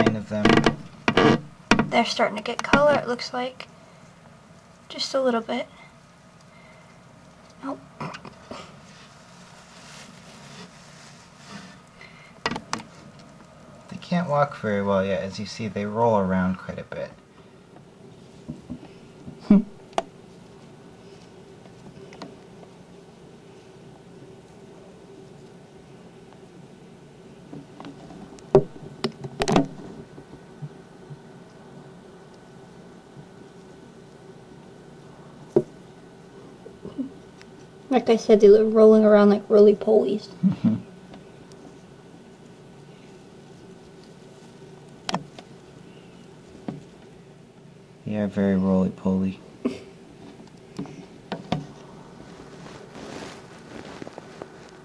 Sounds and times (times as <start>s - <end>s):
Speech: 4.9s - 5.7s, 37.9s - 40.4s, 48.1s - 49.4s.